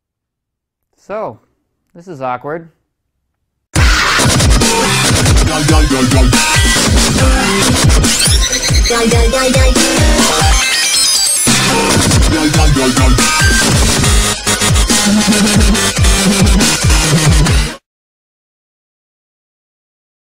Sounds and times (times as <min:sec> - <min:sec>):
Dubstep: 0:03.8 - 0:17.8.